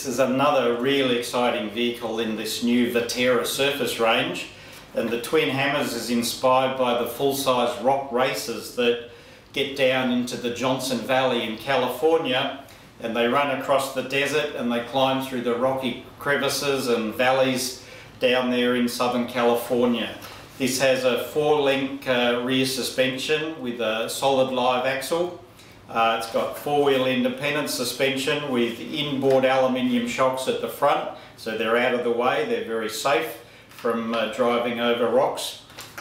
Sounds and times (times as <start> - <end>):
Speech: 0.0 - 35.7.